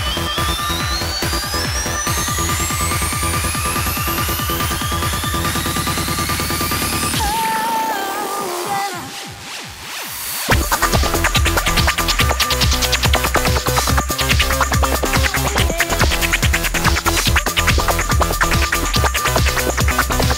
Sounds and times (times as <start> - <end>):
Electronic music: 0.0 - 20.3.